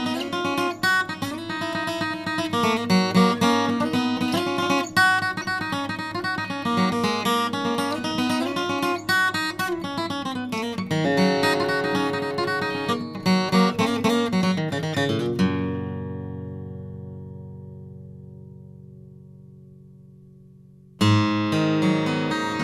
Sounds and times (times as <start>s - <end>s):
Acoustic guitar: 0.0s - 22.6s.